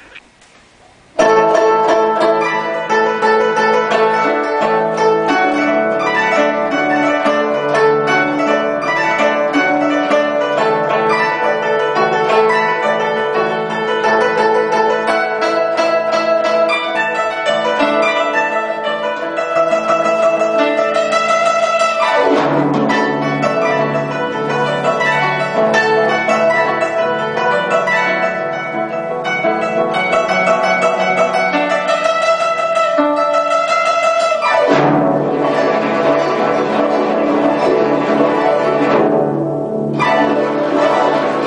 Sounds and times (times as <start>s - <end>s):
Pizzicato: 0.0s - 0.4s, 1.2s - 41.4s
Zither: 1.2s - 41.4s.